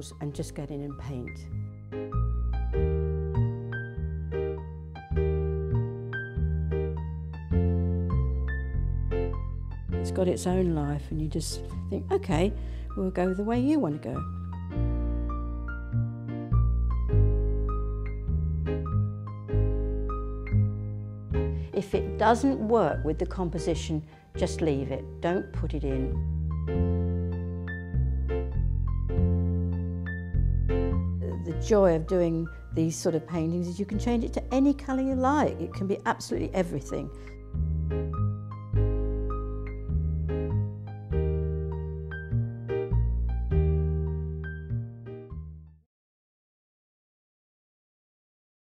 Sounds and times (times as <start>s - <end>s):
Speech: 0.0s - 1.5s, 10.1s - 14.2s, 21.8s - 26.2s, 31.2s - 37.2s
Music: 0.0s - 45.9s.